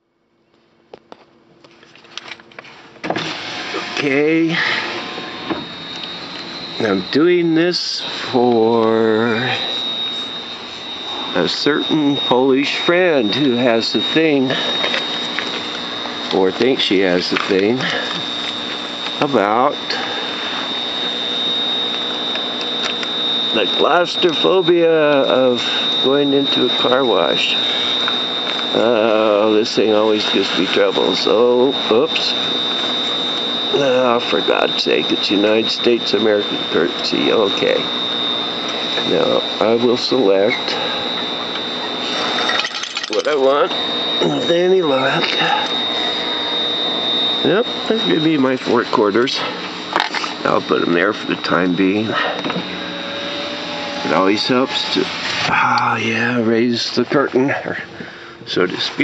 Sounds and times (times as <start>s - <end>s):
Speech: 3.9s - 4.7s, 6.8s - 9.7s, 11.4s - 14.7s, 16.3s - 18.0s, 19.2s - 20.0s, 23.5s - 27.6s, 28.7s - 32.4s, 33.7s - 37.9s, 39.0s - 40.8s, 43.2s - 45.6s, 47.4s - 49.6s, 50.4s - 52.2s, 54.0s - 59.0s.